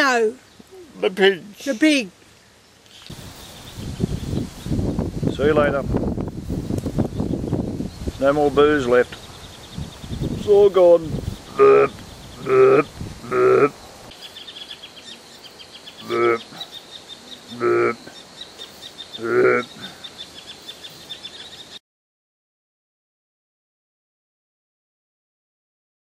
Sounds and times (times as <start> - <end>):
Oink: 11.5 - 13.8, 16.0 - 16.6, 17.5 - 18.1, 19.2 - 20.0.